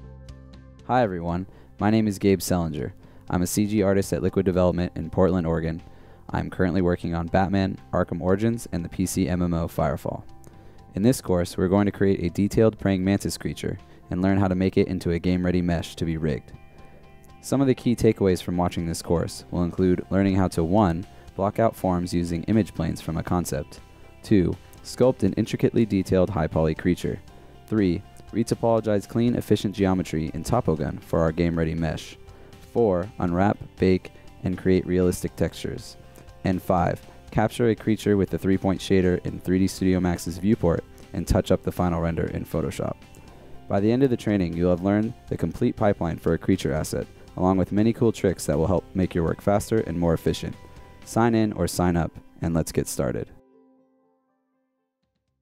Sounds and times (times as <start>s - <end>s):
Music: 0.0s - 55.4s
Speech: 0.9s - 10.3s, 10.9s - 16.6s, 17.4s - 43.0s, 43.7s - 53.4s.